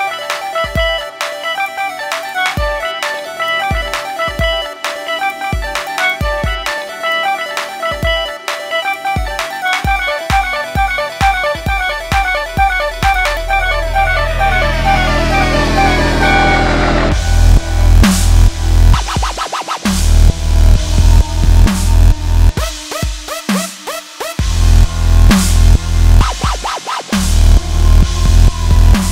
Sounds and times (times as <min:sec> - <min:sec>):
Dance music: 0:00.0 - 0:29.1
Video game music: 0:00.0 - 0:29.1.